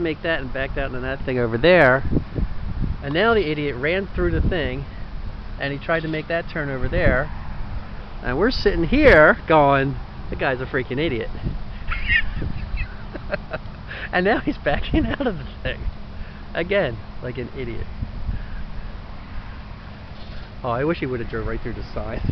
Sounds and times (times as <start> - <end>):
Speech: 0.0 - 2.0, 3.0 - 4.8, 5.6 - 7.3, 8.2 - 11.3, 14.1 - 15.8, 16.6 - 17.9, 20.6 - 22.3
Vehicle: 0.0 - 22.3.